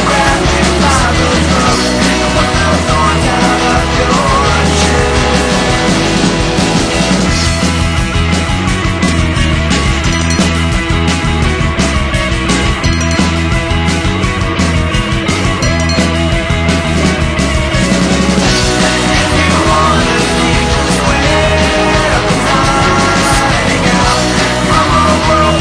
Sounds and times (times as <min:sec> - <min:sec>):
Music: 0:00.0 - 0:25.6.